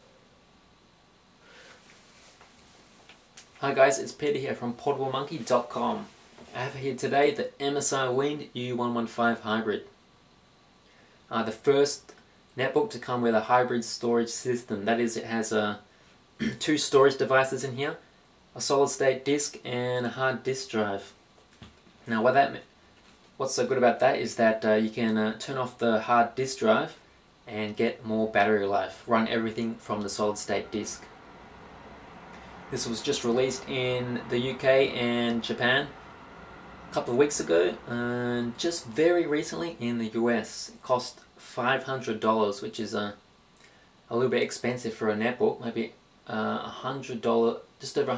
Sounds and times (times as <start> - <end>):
Speech: 3.6 - 10.0, 11.3 - 18.0, 18.6 - 21.2, 22.1 - 22.7, 23.4 - 31.1, 32.7 - 36.0, 36.9 - 43.2, 44.1 - 48.1.